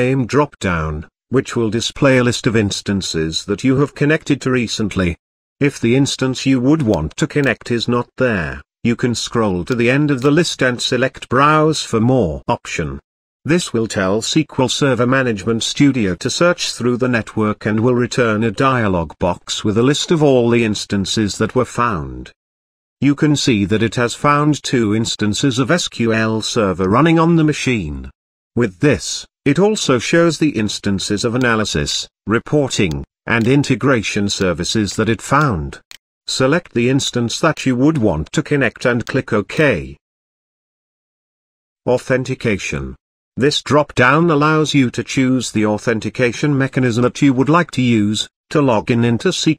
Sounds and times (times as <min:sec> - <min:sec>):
Speech: 0:00.0 - 0:22.4, 0:23.0 - 0:40.0, 0:41.9 - 0:49.5.